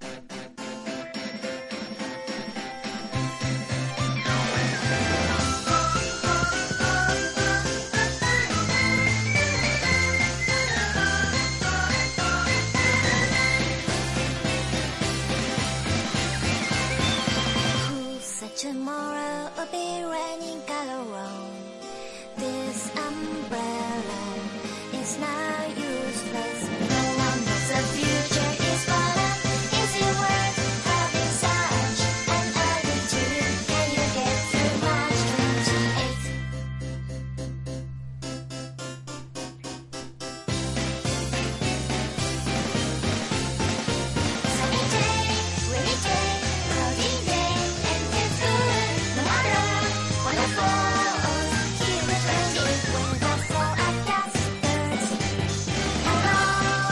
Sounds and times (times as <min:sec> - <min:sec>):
Pop music: 0:00.1 - 0:36.5, 0:40.5 - 0:56.9.